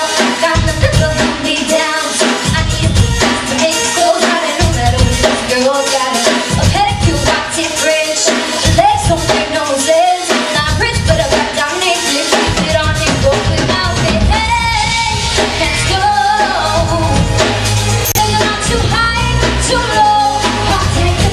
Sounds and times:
Female singing: 0:00.0 - 0:17.6, 0:18.2 - 0:21.3
Music: 0:00.0 - 0:21.3.

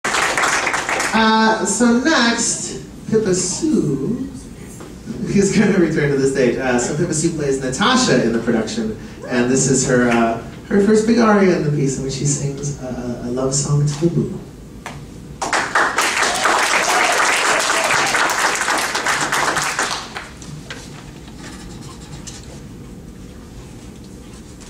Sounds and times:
Male speech, man speaking: 0:01.1 - 0:04.4, 0:05.1 - 0:14.4.

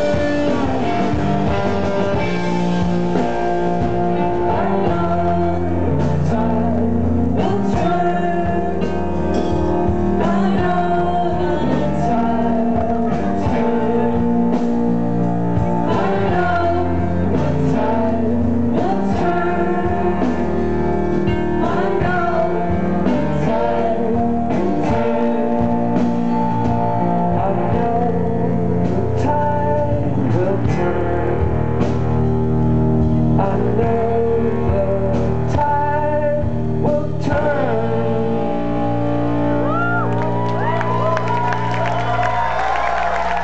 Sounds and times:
Music: 0:00.0 - 0:43.4
Singing: 0:04.2 - 0:31.4, 0:33.3 - 0:43.4.

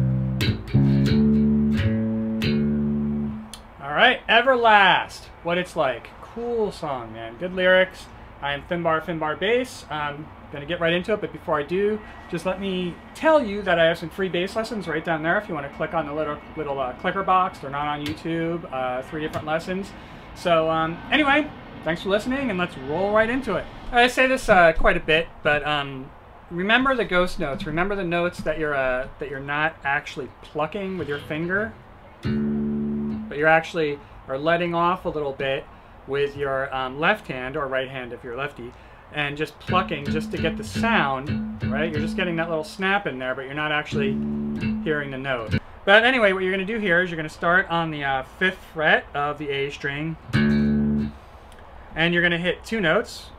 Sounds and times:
Speech: 0:03.6 - 0:31.8, 0:33.3 - 0:50.2, 0:52.0 - 0:53.3.

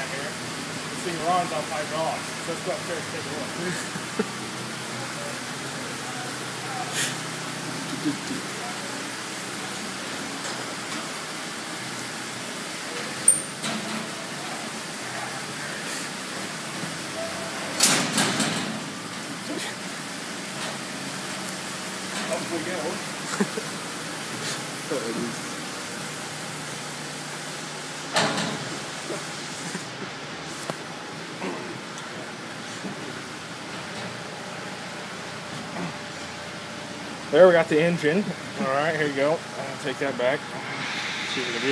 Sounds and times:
Speech: 0:01.0 - 0:03.7, 0:22.2 - 0:23.0, 0:37.3 - 0:40.4, 0:41.4 - 0:41.7.

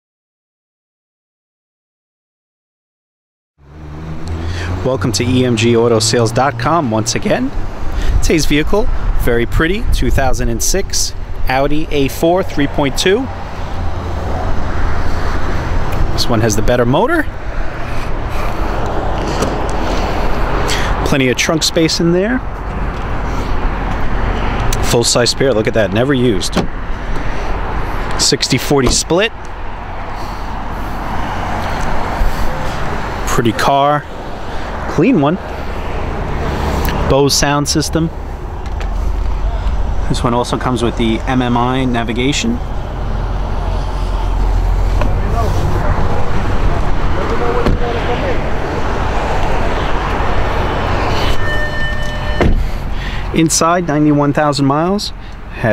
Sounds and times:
Car: 0:03.6 - 0:55.7
Speech: 0:04.8 - 0:07.6, 0:08.2 - 0:13.3, 0:16.2 - 0:17.3, 0:21.0 - 0:22.4, 0:24.8 - 0:26.7, 0:28.2 - 0:29.4, 0:33.3 - 0:34.1, 0:34.9 - 0:35.4, 0:37.1 - 0:38.2, 0:39.4 - 0:42.6, 0:45.1 - 0:48.5, 0:53.3 - 0:55.7.

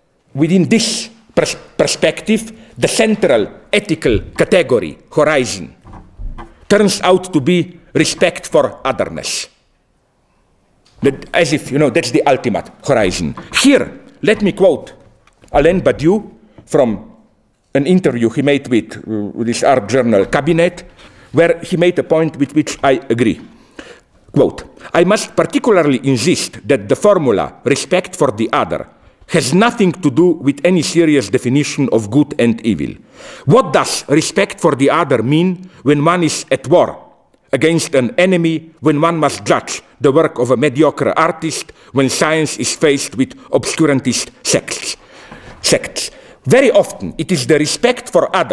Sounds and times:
Speech: 0:00.3 - 0:05.8, 0:06.7 - 0:09.6, 0:11.0 - 0:23.5, 0:24.3 - 0:45.0, 0:45.6 - 0:48.5.

